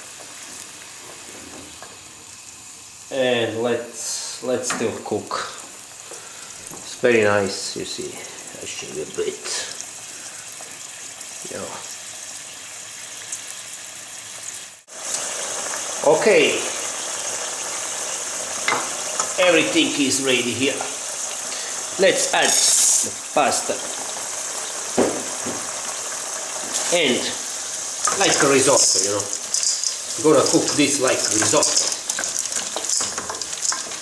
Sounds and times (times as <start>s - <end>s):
Boiling: 0.0s - 34.0s
Speech: 3.1s - 5.6s, 6.9s - 9.8s, 11.4s - 11.9s, 16.0s - 16.8s, 19.4s - 21.0s, 22.0s - 23.9s, 26.8s - 27.4s, 28.1s - 29.4s, 30.2s - 32.0s.